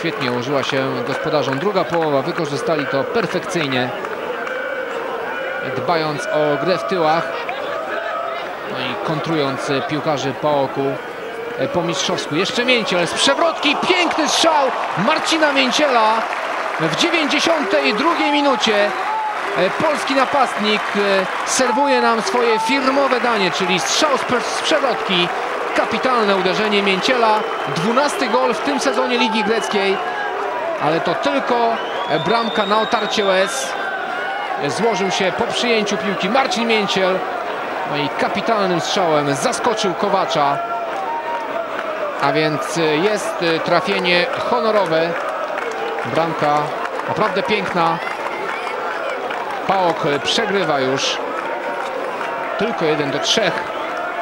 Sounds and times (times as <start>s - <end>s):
Speech: 0.0s - 4.0s, 5.6s - 11.0s, 11.6s - 19.0s, 19.6s - 30.1s, 30.8s - 33.8s, 34.6s - 37.3s, 37.9s - 40.6s, 42.2s - 45.2s, 46.0s - 48.1s, 49.7s - 51.2s, 52.6s - 53.7s.